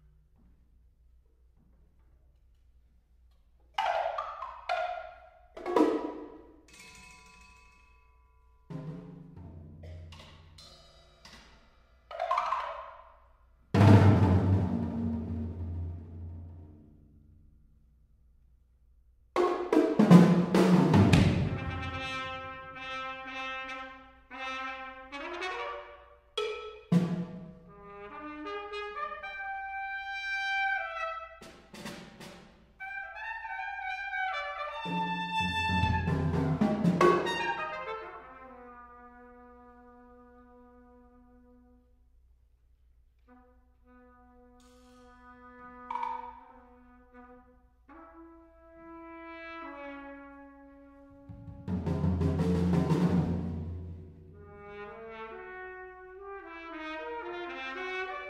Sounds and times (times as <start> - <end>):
Drum: 19.4 - 22.1, 34.9 - 37.5, 51.3 - 54.0
Trumpet: 20.4 - 42.2, 43.2 - 58.2.